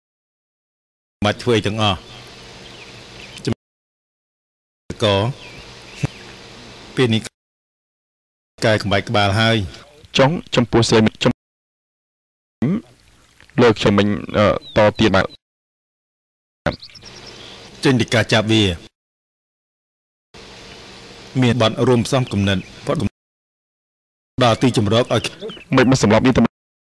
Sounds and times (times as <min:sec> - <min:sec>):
Speech: 0:01.2 - 0:02.1, 0:04.9 - 0:05.4, 0:07.0 - 0:07.3, 0:08.6 - 0:11.4, 0:12.6 - 0:12.9, 0:13.6 - 0:15.4, 0:17.8 - 0:18.9, 0:21.4 - 0:23.1, 0:24.4 - 0:26.5.